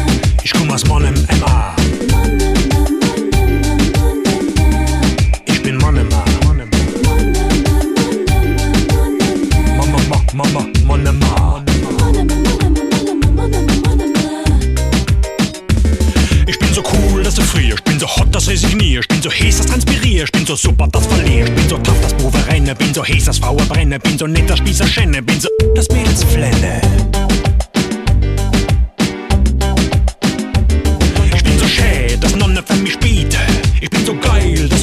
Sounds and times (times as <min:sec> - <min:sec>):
Music: 0:00.0 - 0:34.8.